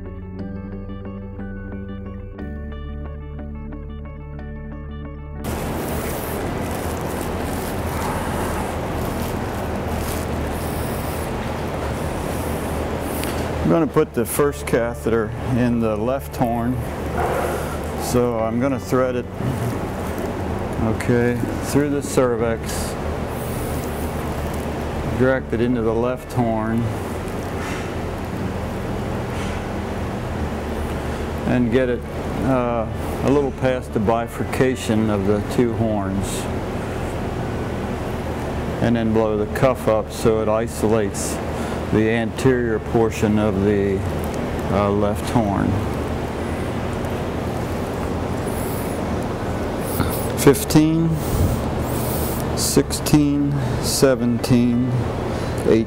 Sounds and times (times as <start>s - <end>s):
Speech: 13.6s - 16.8s, 18.0s - 19.3s, 20.8s - 23.0s, 25.1s - 26.9s, 31.4s - 36.5s, 38.8s - 44.1s, 44.7s - 45.8s, 50.3s - 51.2s, 52.6s - 55.0s, 55.6s - 55.8s.